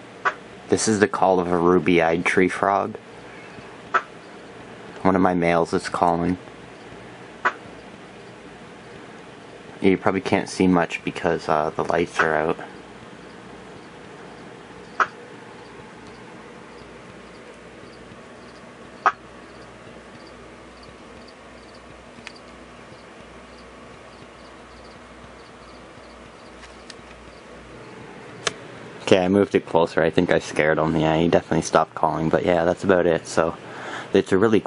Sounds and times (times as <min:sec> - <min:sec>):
Speech: 0:00.7 - 0:03.0, 0:05.0 - 0:06.4, 0:09.8 - 0:12.7, 0:29.0 - 0:34.6
Frog: 0:14.8 - 0:15.2, 0:16.7 - 0:22.4, 0:24.4 - 0:26.6.